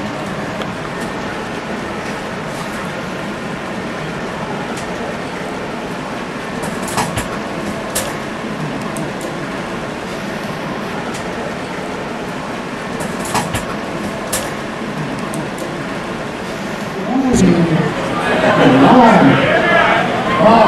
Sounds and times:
Speech: 17.0 - 20.6.

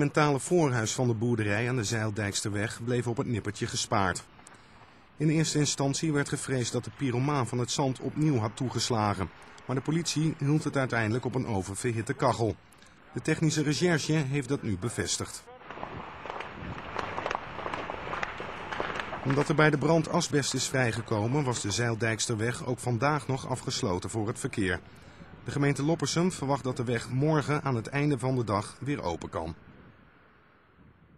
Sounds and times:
Speech: 0.0 - 4.3, 5.2 - 15.7, 19.2 - 29.6.

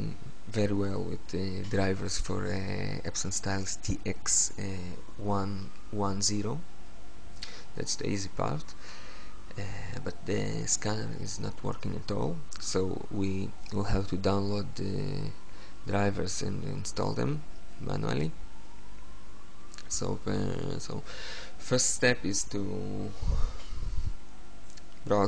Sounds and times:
Speech: 0.0 - 6.6, 7.8 - 8.8, 9.5 - 18.4, 19.8 - 23.5, 25.0 - 25.2.

